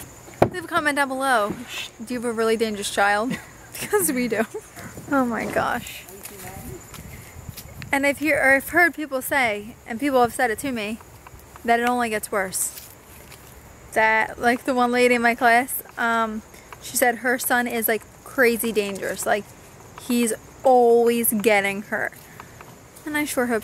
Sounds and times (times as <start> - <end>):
Outside, rural or natural: 0.0 - 23.6
Speech: 5.1 - 6.8.